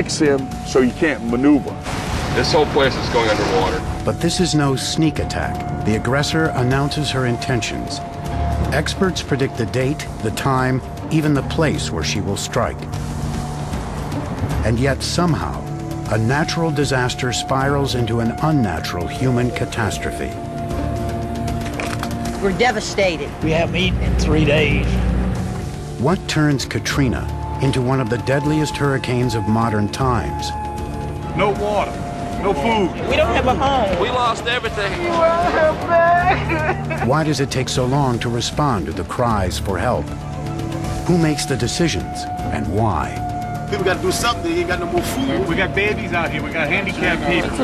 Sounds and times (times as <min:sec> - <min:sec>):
Music: 0:00.0 - 0:47.6.